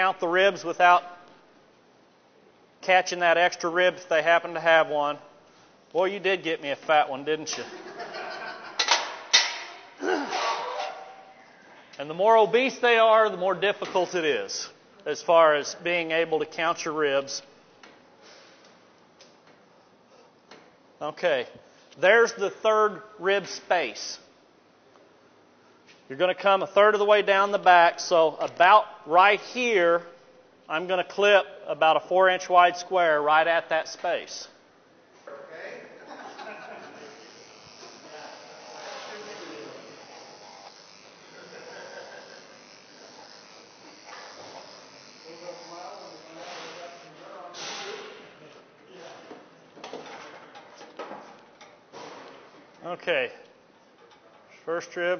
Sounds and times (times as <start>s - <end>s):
Speech: 12.0s - 17.5s, 21.0s - 24.3s, 26.1s - 30.1s, 45.2s - 49.3s, 52.8s - 53.4s, 54.6s - 55.1s.